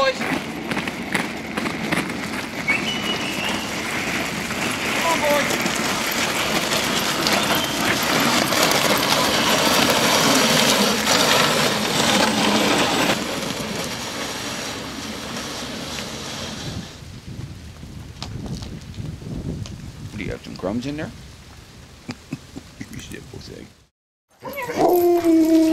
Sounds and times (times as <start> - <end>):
Outside, rural or natural: 0.0 - 25.7.